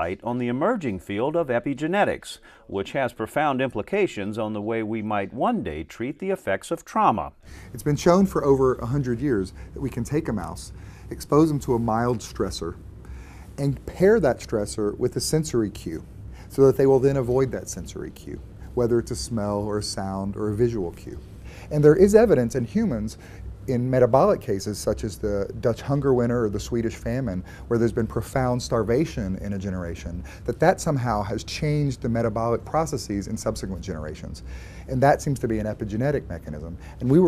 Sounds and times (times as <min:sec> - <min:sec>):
Speech: 0:00.0 - 0:12.8, 0:13.6 - 0:37.2.